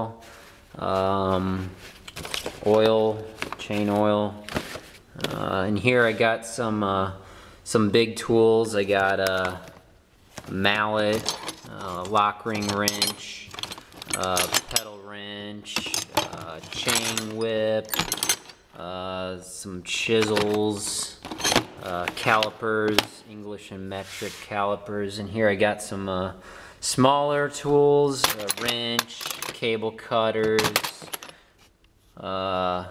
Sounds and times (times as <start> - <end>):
Speech: 0.8 - 1.8, 2.6 - 4.4, 5.2 - 9.8, 10.5 - 13.5, 14.2 - 18.0, 18.8 - 21.2, 21.8 - 31.2, 32.2 - 32.9
Tools: 11.1 - 14.9, 15.7 - 18.7, 21.2 - 23.1, 28.2 - 29.7.